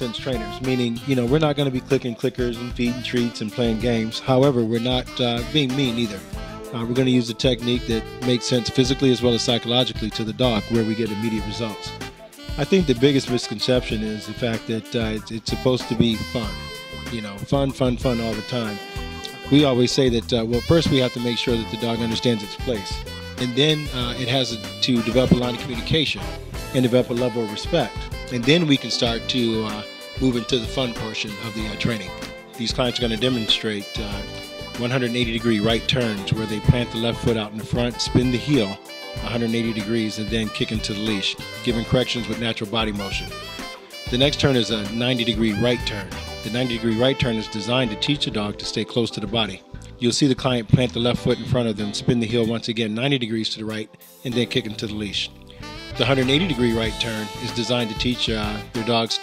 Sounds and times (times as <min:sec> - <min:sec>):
Speech: 0:00.0 - 0:43.4, 0:44.1 - 0:55.3, 0:56.0 - 0:59.2
Music: 0:00.0 - 0:59.2.